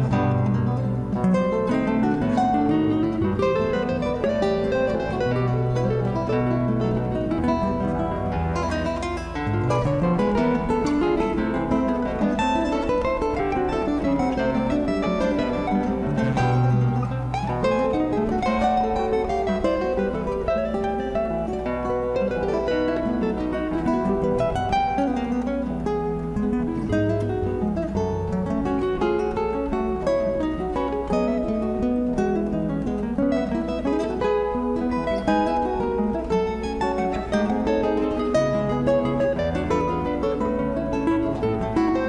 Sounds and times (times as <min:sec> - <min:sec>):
Electric guitar: 0:00.0 - 0:42.0
Strum: 0:00.0 - 0:42.0.